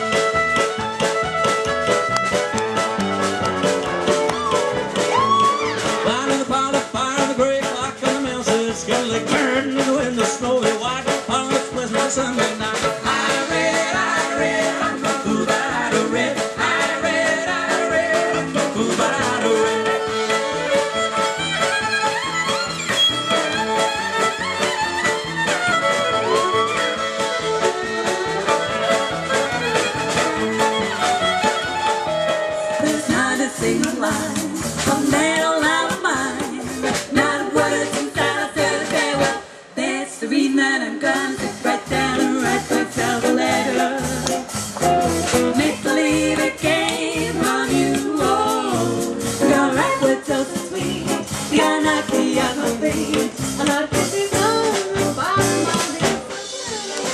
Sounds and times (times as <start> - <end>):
Percussion: 0.0 - 39.5, 41.0 - 57.1
Jazz: 0.0 - 57.1
Swing music: 0.0 - 57.1.